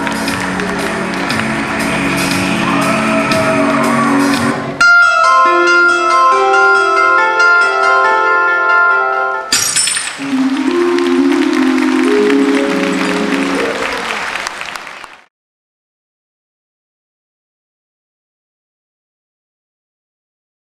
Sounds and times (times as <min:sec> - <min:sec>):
Inside, large room or hall: 0:00.0 - 0:15.3
Bell: 0:06.8 - 0:14.4.